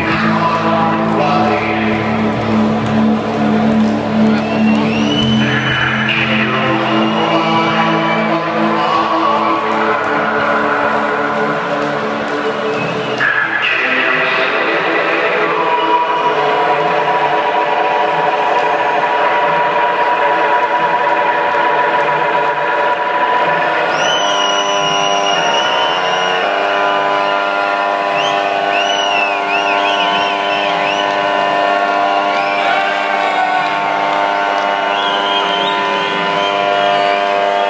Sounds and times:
Cheering: 0.0s - 37.7s
Music: 0.0s - 37.7s.

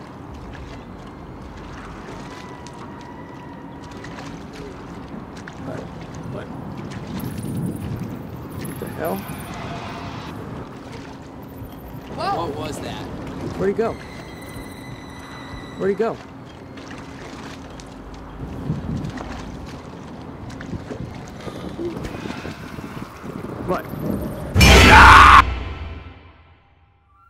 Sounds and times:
Rowboat, canoe, kayak: 0.0s - 24.6s.

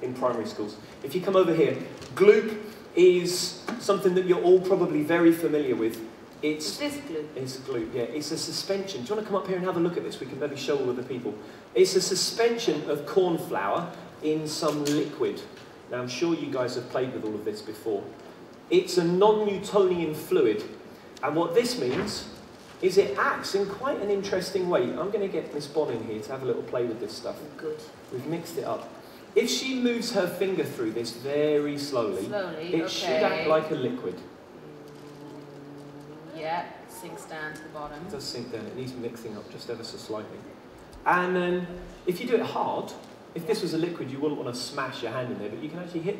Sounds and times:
Male speech, man speaking: 0.0s - 34.3s, 37.9s - 46.1s.

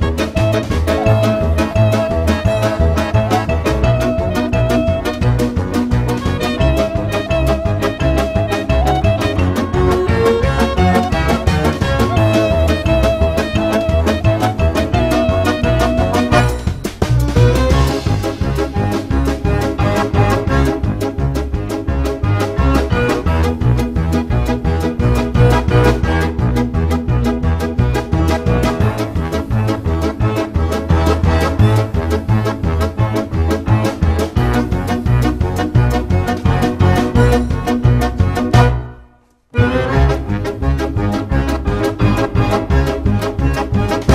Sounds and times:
Music: 0.0s - 44.1s.

